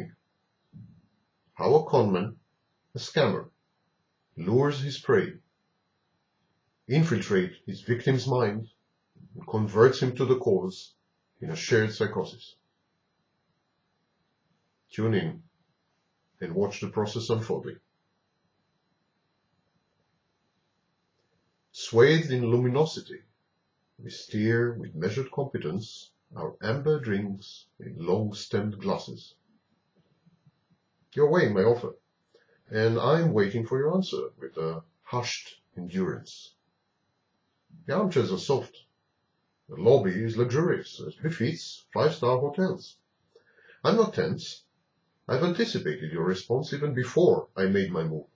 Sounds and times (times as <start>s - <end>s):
Speech: 0.0s - 0.2s, 1.6s - 3.6s, 4.4s - 5.5s, 6.9s - 12.6s, 14.9s - 15.5s, 16.4s - 17.9s, 21.8s - 23.3s, 24.0s - 29.4s, 31.2s - 32.0s, 32.7s - 36.6s, 37.8s - 38.9s, 39.7s - 43.1s, 43.8s - 44.7s, 45.3s - 48.3s.